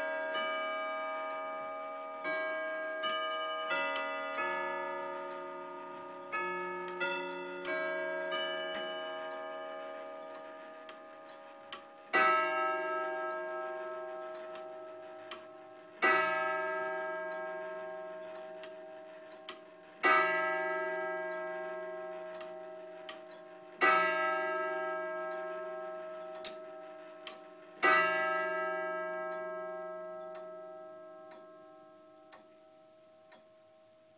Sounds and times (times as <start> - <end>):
Tick-tock: 0.1 - 28.6, 29.2 - 32.6
Tick: 26.4 - 26.6.